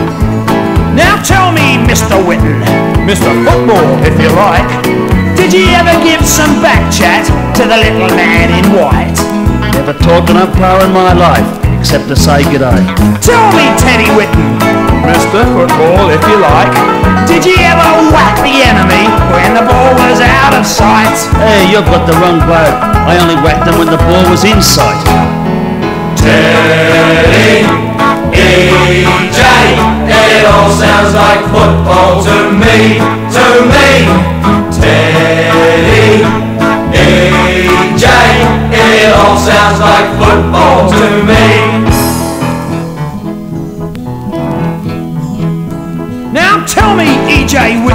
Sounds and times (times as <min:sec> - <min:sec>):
Music: 0:00.0 - 0:47.9.